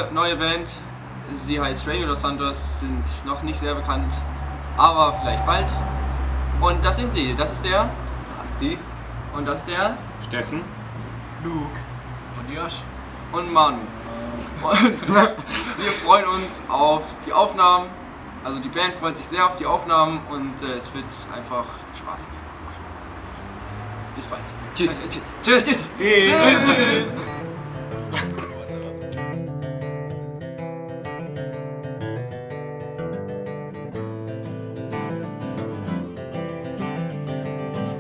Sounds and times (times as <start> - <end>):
Speech: 4.8 - 5.8, 15.9 - 22.3, 24.2 - 27.3
Music: 26.7 - 38.0.